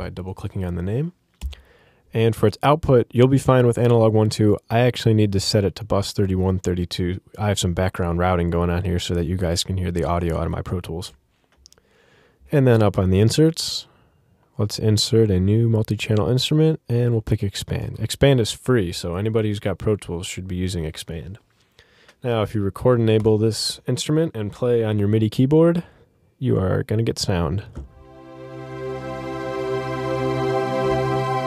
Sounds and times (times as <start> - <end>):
Speech: 0.0 - 1.2, 2.1 - 11.2, 12.5 - 14.0, 14.6 - 21.4, 22.2 - 27.8.